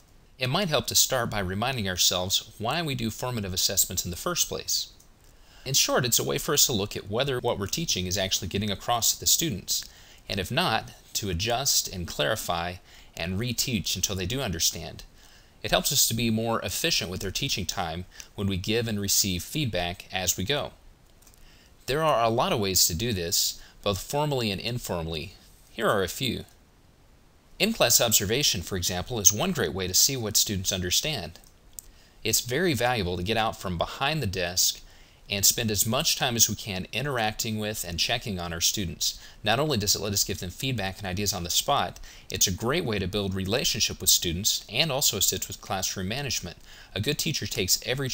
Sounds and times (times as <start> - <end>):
Speech: 0.4 - 5.0, 5.6 - 20.8, 21.8 - 26.6, 27.6 - 31.5, 32.2 - 48.1.